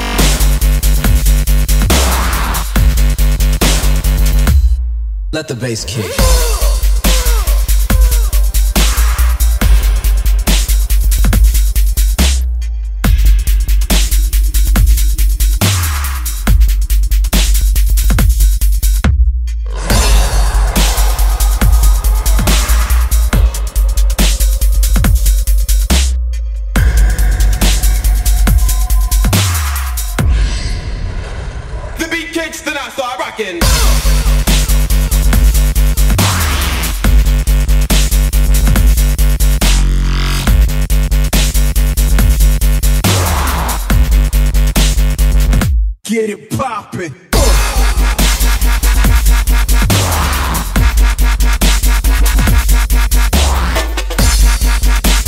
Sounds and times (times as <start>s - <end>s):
Dubstep: 0.0s - 4.8s, 5.4s - 30.9s, 32.0s - 45.6s, 47.3s - 55.2s.